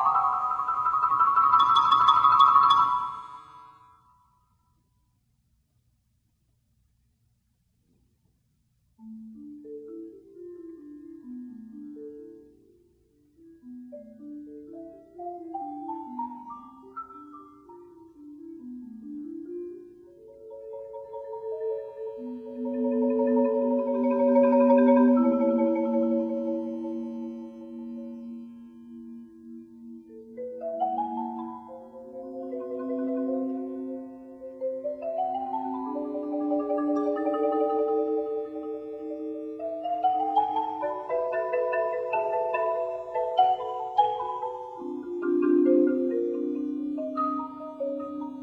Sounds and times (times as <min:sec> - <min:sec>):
Marimba, xylophone: 0:00.0 - 0:04.1, 0:09.0 - 0:48.4.